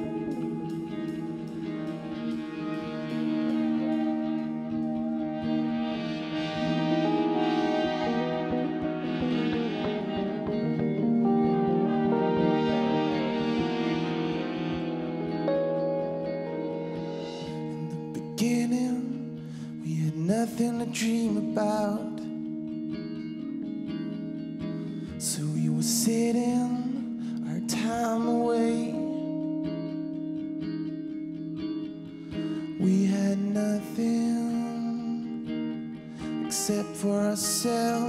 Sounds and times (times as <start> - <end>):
Music: 0.0 - 38.0.